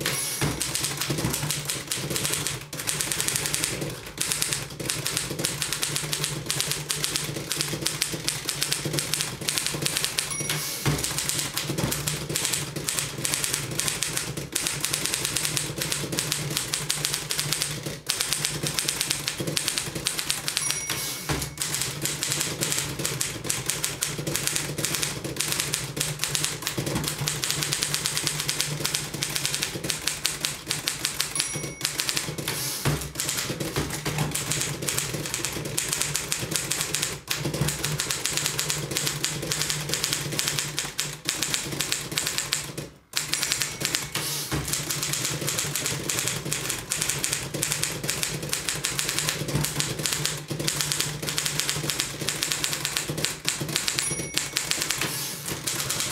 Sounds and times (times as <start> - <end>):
Typewriter: 0.0 - 56.1.